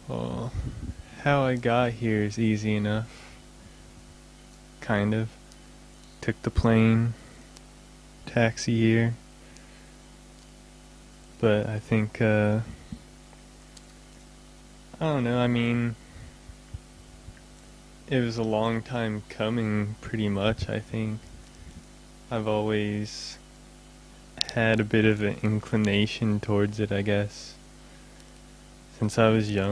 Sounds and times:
Speech: 0.0 - 3.1, 4.8 - 5.4, 6.2 - 7.2, 8.3 - 9.2, 11.4 - 12.8, 15.0 - 16.0, 18.1 - 21.2, 22.3 - 23.4, 24.4 - 27.6, 29.0 - 29.7.

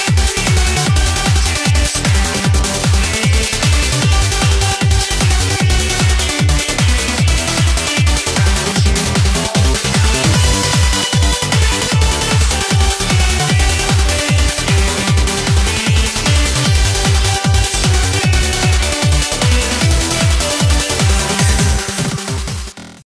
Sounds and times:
Exciting music: 0.0 - 23.0.

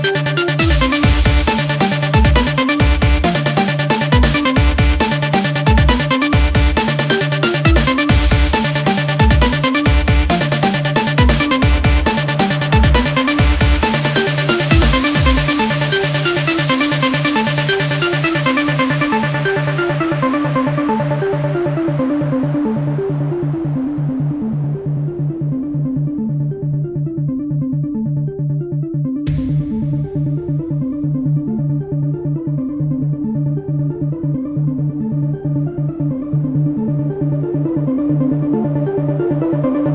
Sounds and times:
Techno: 0.0 - 39.9
Trance music: 0.0 - 39.9.

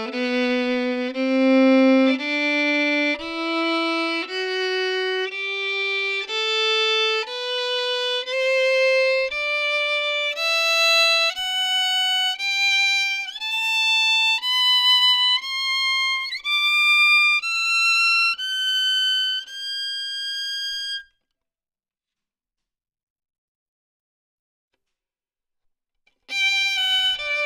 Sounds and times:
Music: 0.0 - 21.2, 26.1 - 27.4.

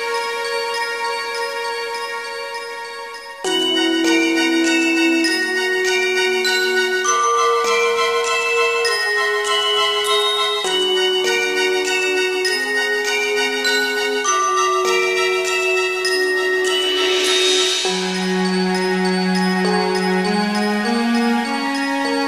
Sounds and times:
Music: 0.0 - 22.2.

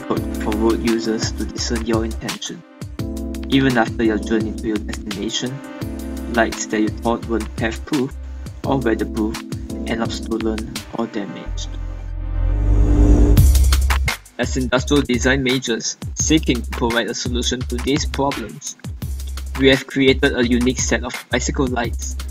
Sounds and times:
Speech: 0.0 - 2.6, 3.5 - 5.6, 6.3 - 11.8, 14.4 - 18.8, 19.6 - 22.2
Music: 0.0 - 22.3.

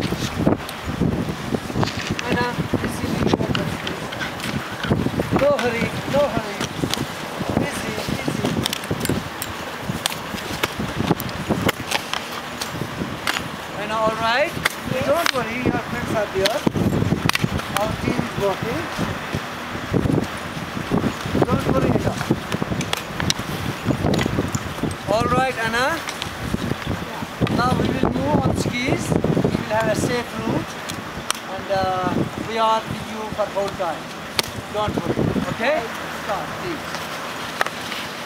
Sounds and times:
Outside, rural or natural: 0.0 - 38.2
Speech: 2.2 - 4.2, 5.4 - 6.7, 7.6 - 8.6, 13.8 - 16.6, 17.7 - 19.0, 21.4 - 22.3, 25.1 - 26.0, 27.0 - 30.7, 31.5 - 34.0, 34.6 - 36.9.

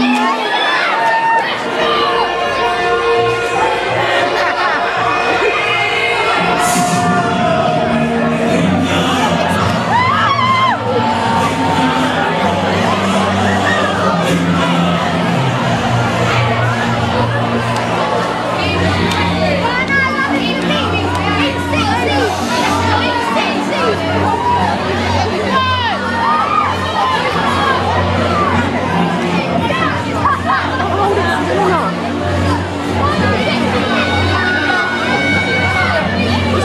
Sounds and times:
Music: 0.0 - 36.6
Speech: 0.0 - 36.6.

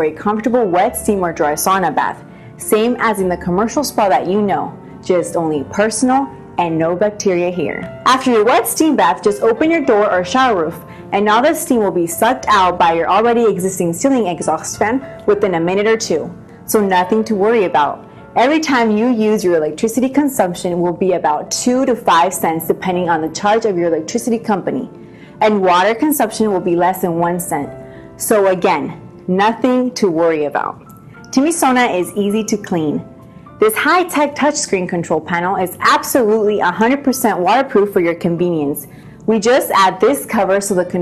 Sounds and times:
Speech: 0.0 - 30.8, 31.4 - 33.0, 33.6 - 41.0
Inside, small room: 0.0 - 41.0
Music: 0.0 - 41.0.

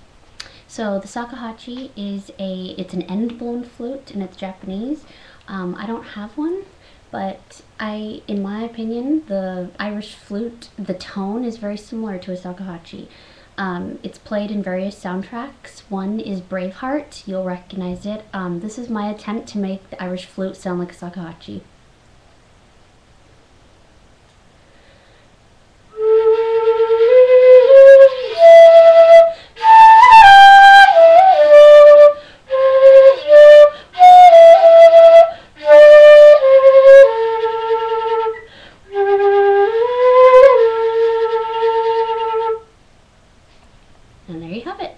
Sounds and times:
Music: 25.9 - 42.7.

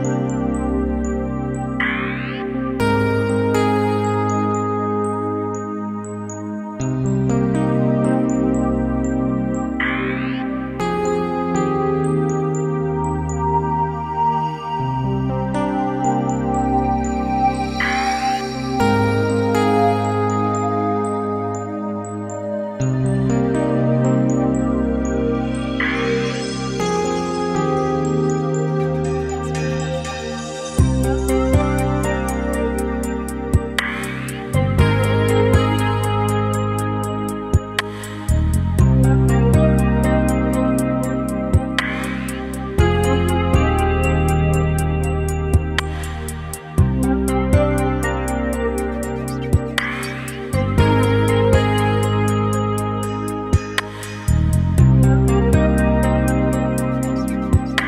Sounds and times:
Music: 0.0 - 57.8.

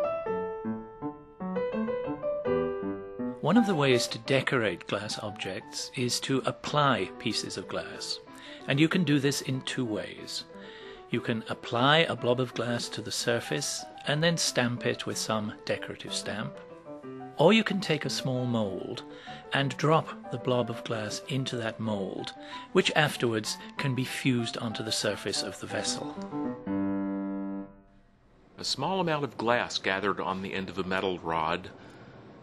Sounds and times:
Music: 0.0 - 28.2
Speech: 3.4 - 10.5, 11.1 - 16.6, 17.4 - 26.2, 28.6 - 31.8.

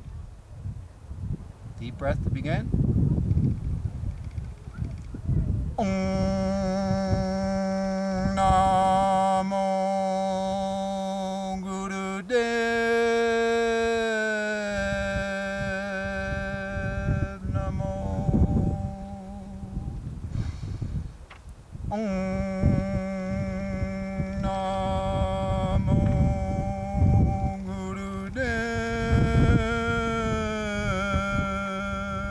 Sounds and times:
Mantra: 5.8 - 20.0, 21.9 - 32.3.

